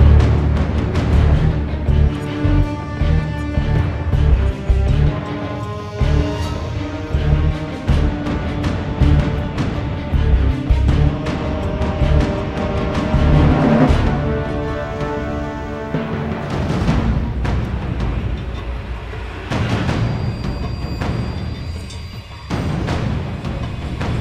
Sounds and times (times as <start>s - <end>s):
Music: 0.0s - 24.2s.